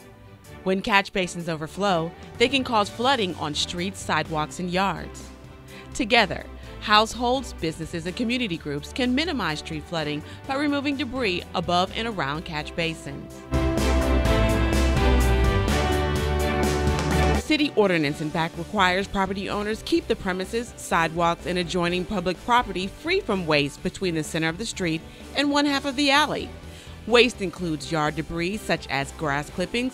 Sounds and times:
Music: 0.0 - 29.9
Speech: 0.7 - 5.2, 6.0 - 13.3, 17.4 - 26.5, 27.1 - 29.9.

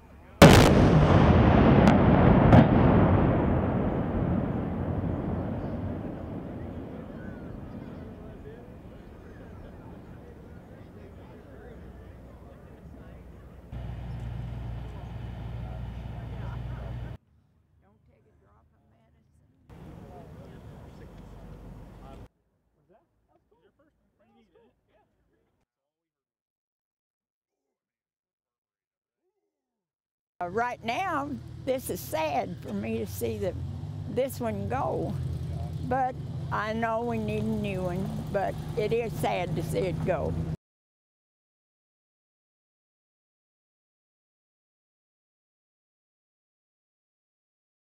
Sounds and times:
Speech: 17.8 - 25.6, 30.4 - 40.4.

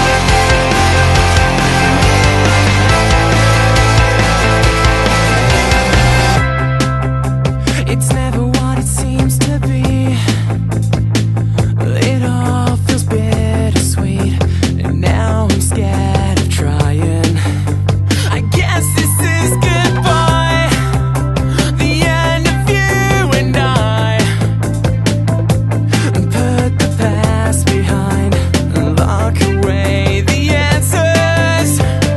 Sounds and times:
Music: 0.0 - 32.1.

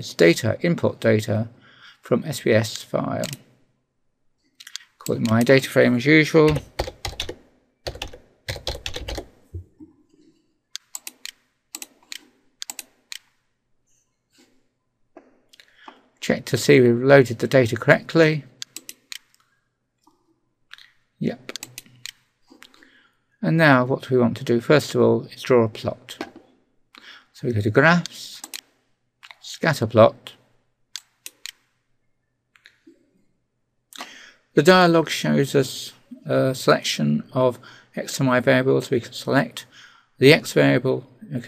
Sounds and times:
Speech: 0.0 - 3.4, 5.0 - 6.6, 16.2 - 18.5, 21.2 - 21.6, 23.4 - 26.2, 27.4 - 28.5, 29.4 - 30.4, 34.6 - 41.4.

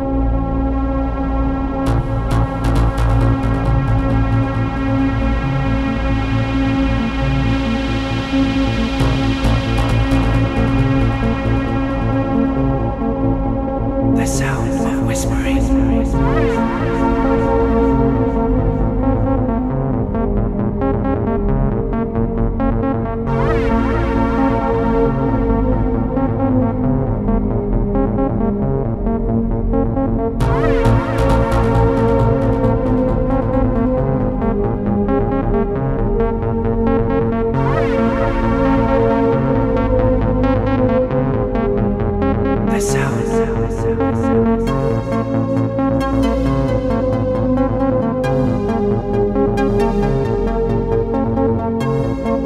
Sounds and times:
Music: 0.0 - 52.4
Speech: 14.2 - 17.5, 42.7 - 44.2.

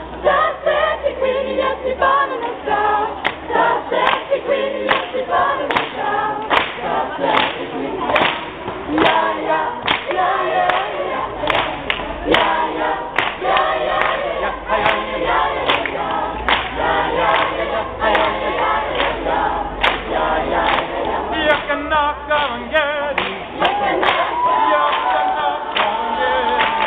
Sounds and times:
Choir: 0.0 - 26.8.

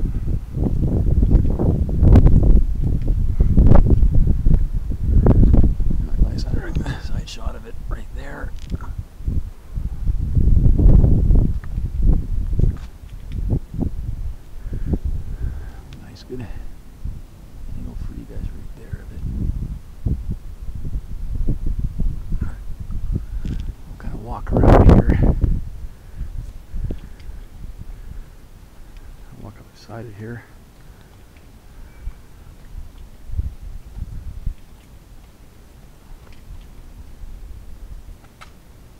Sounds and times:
Speech: 6.1 - 8.5, 16.0 - 16.7, 17.7 - 19.2, 24.0 - 25.3, 29.2 - 30.5.

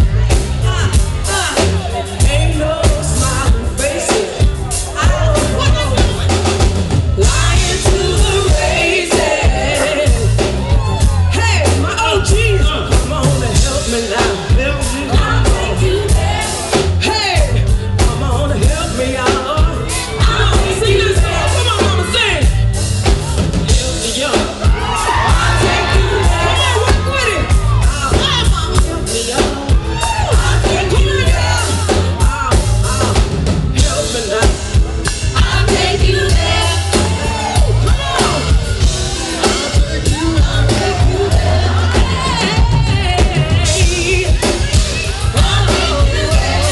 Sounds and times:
Music: 0.0 - 46.7
Female singing: 0.6 - 6.3, 7.2 - 22.4, 23.9 - 33.2, 35.4 - 38.6, 39.4 - 46.7.

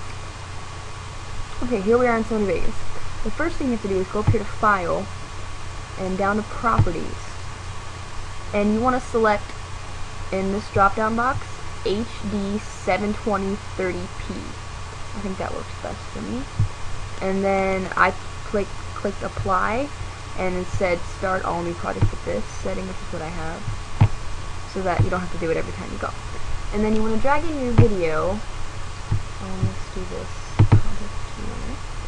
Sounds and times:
Speech: 1.6 - 5.1, 6.0 - 7.4, 8.6 - 9.6, 10.3 - 14.6, 15.2 - 16.5, 17.2 - 23.7, 24.7 - 28.4, 29.4 - 31.8.

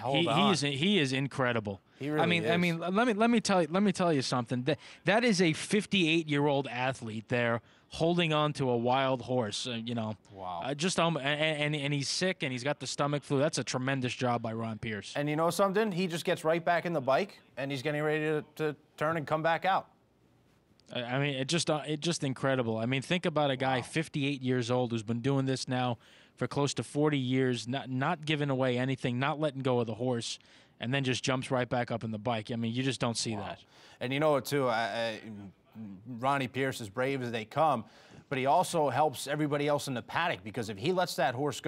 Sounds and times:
Speech: 0.0 - 19.9, 20.9 - 41.6.

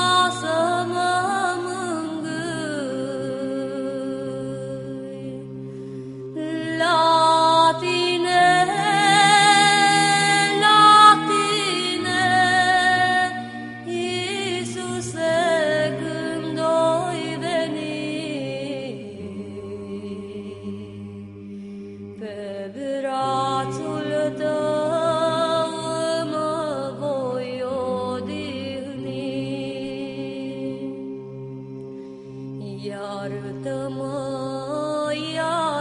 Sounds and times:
Mantra: 0.0 - 31.9, 32.5 - 35.8.

